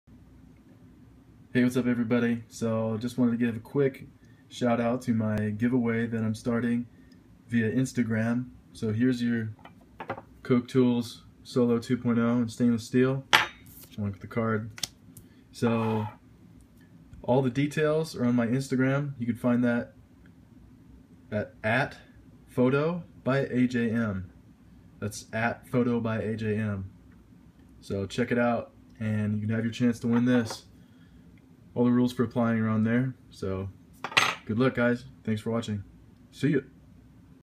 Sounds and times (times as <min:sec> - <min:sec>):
Speech: 0:01.5 - 0:06.9, 0:07.5 - 0:09.6, 0:10.4 - 0:13.3, 0:13.9 - 0:14.8, 0:15.6 - 0:16.2, 0:17.2 - 0:20.0, 0:21.3 - 0:24.4, 0:25.0 - 0:26.9, 0:27.8 - 0:30.7, 0:31.8 - 0:33.8, 0:34.4 - 0:36.7.